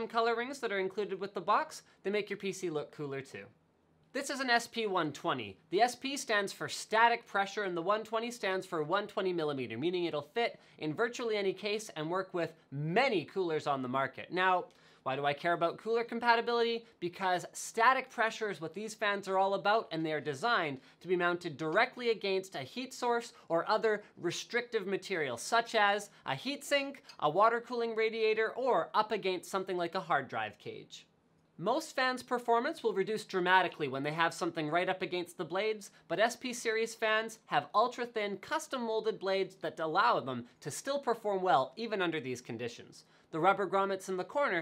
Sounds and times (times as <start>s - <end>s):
Speech: 0.0s - 44.6s.